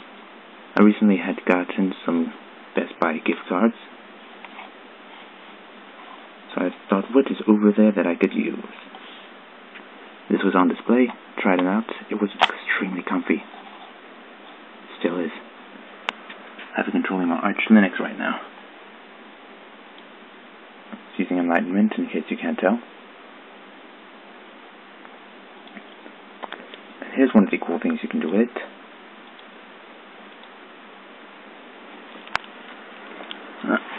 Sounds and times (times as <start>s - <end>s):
Speech: 0.8s - 3.9s, 6.5s - 8.8s, 10.3s - 13.5s, 14.9s - 15.5s, 16.7s - 18.5s, 21.0s - 22.9s, 27.0s - 28.8s, 33.6s - 33.9s.